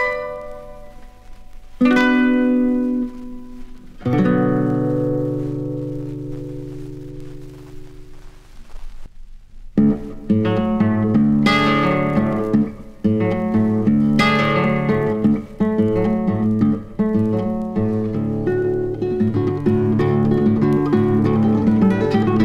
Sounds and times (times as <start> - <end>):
Electronic tuner: 0.0 - 22.4
Guitar: 0.0 - 22.4.